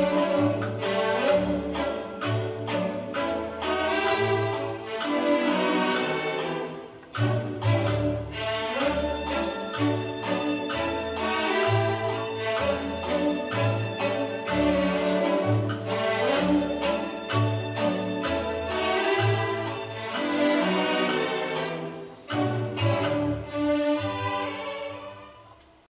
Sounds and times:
Music: 0.0 - 25.9.

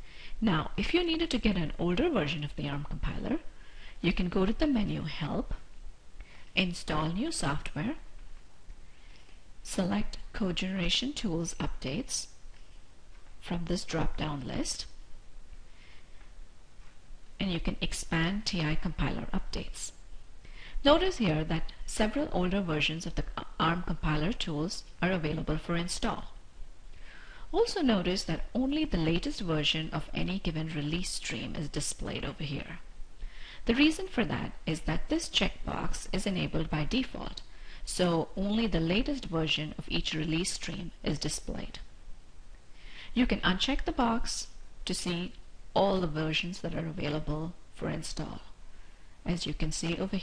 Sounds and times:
Speech: 0.4 - 5.7, 6.6 - 8.1, 9.6 - 12.3, 13.4 - 15.0, 17.4 - 20.0, 20.8 - 26.4, 27.5 - 32.9, 33.6 - 41.9, 43.2 - 48.6, 49.3 - 50.2.

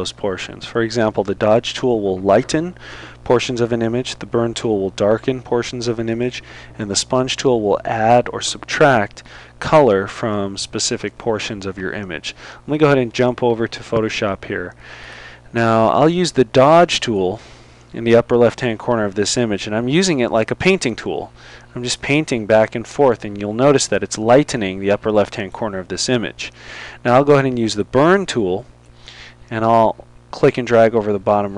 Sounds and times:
Speech: 0.0 - 14.8, 15.5 - 28.7, 29.5 - 31.5.

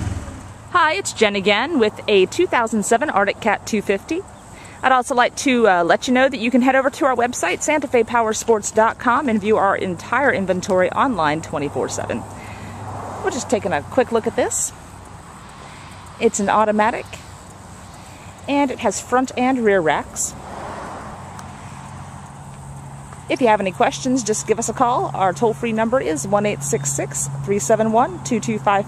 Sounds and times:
Speech: 0.8 - 12.3, 13.2 - 14.8, 16.2 - 17.2, 18.5 - 20.4, 23.3 - 28.8.

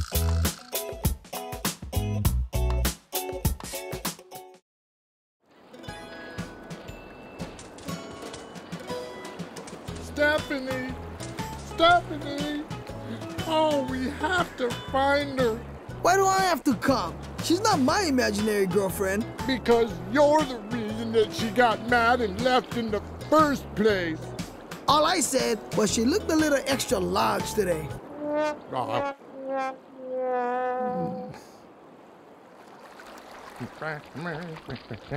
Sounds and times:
Music: 0.0 - 4.6, 5.6 - 28.0
Speech: 13.4 - 24.2, 24.9 - 28.0, 33.6 - 35.1.

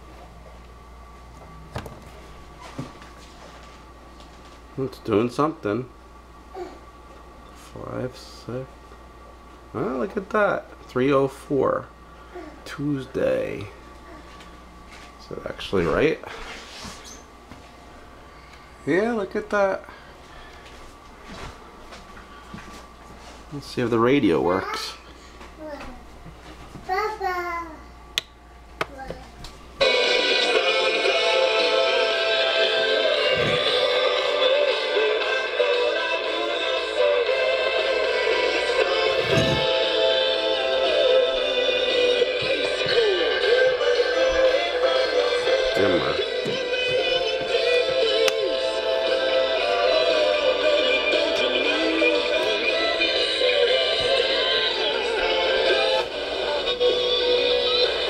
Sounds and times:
Speech: 4.8 - 5.9, 9.8 - 11.9, 15.2 - 16.3, 18.9 - 19.9, 23.5 - 25.0.

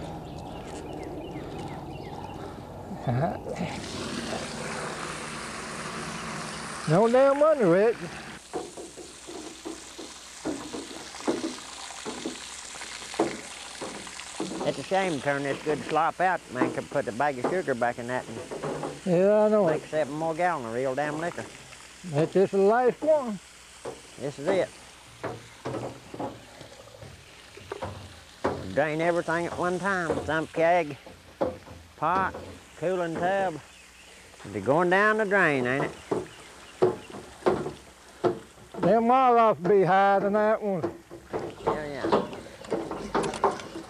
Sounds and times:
Speech: 6.9 - 8.1, 14.6 - 18.4, 19.1 - 21.5, 22.1 - 23.4, 24.2 - 24.7, 28.6 - 31.0, 32.0 - 33.6, 34.5 - 36.0, 38.8 - 40.9, 41.7 - 42.3.

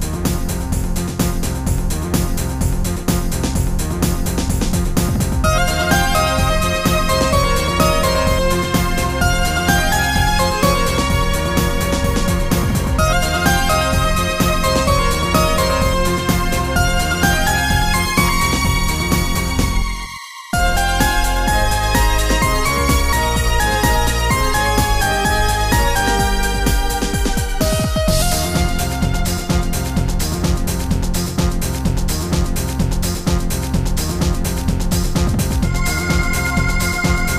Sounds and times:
Music: 0.0 - 37.3.

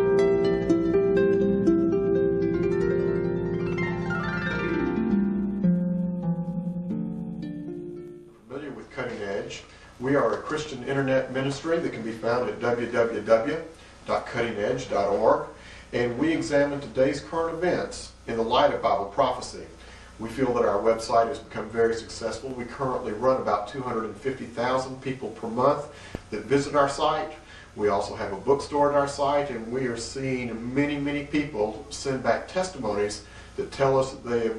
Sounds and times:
Speech: 8.5 - 34.5.

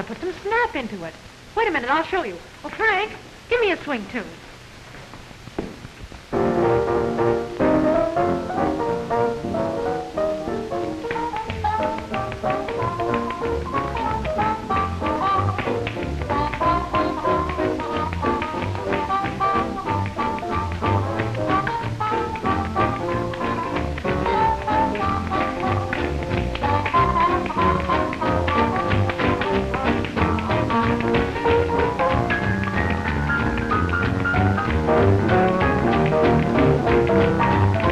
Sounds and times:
Music: 6.3 - 37.9.

